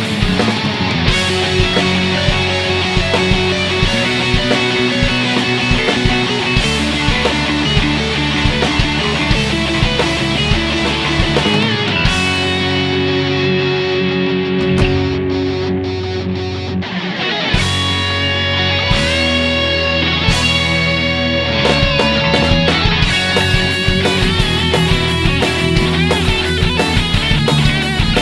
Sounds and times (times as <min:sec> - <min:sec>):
Strum: 0:12.3 - 0:17.0.